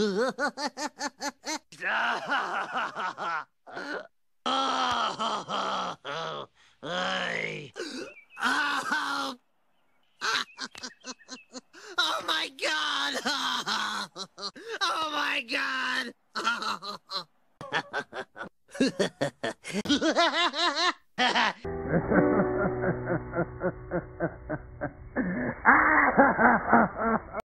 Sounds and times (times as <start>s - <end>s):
Music: 21.7s - 25.4s.